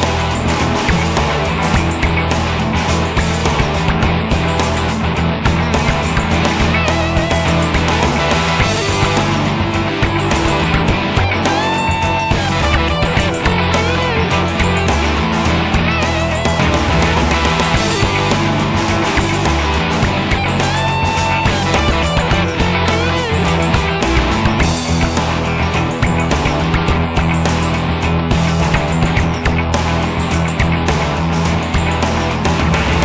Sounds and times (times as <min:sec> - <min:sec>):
Music: 0:00.0 - 0:33.0.